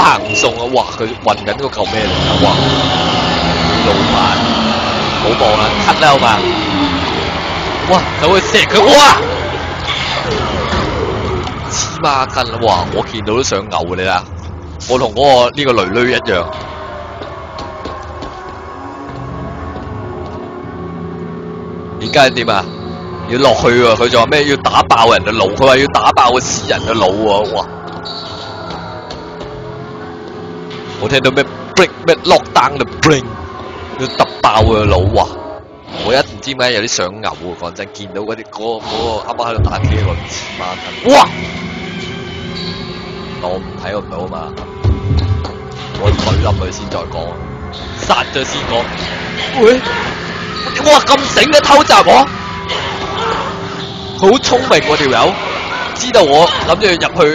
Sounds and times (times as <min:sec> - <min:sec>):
Speech: 0:00.0 - 0:02.8, 0:03.8 - 0:04.5, 0:05.2 - 0:06.5, 0:07.9 - 0:09.3, 0:11.7 - 0:16.5, 0:22.0 - 0:22.7, 0:23.3 - 0:27.7, 0:31.0 - 0:33.4, 0:34.0 - 0:35.4, 0:36.0 - 0:41.4, 0:43.4 - 0:44.6, 0:46.0 - 0:47.4, 0:48.0 - 0:49.0, 0:49.6 - 0:49.9, 0:50.8 - 0:52.3, 0:54.2 - 0:55.4, 0:56.0 - 0:57.3.